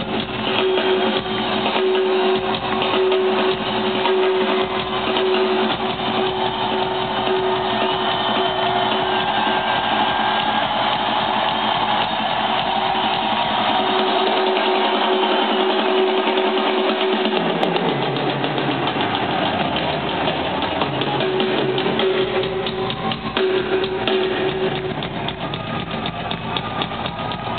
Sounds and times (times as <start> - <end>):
Drum kit: 0.0 - 27.5.